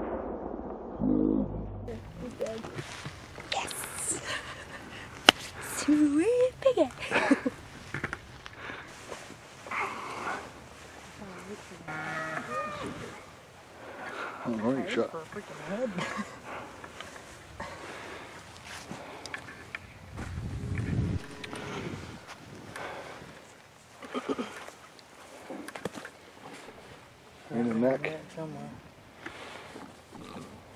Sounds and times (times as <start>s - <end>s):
Animal: 11.9s - 13.3s, 30.1s - 30.6s.